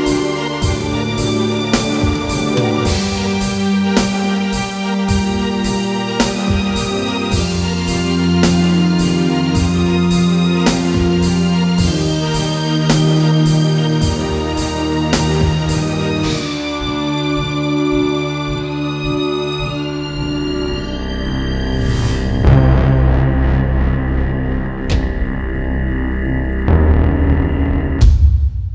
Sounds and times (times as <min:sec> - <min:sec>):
Music: 0:00.0 - 0:28.7.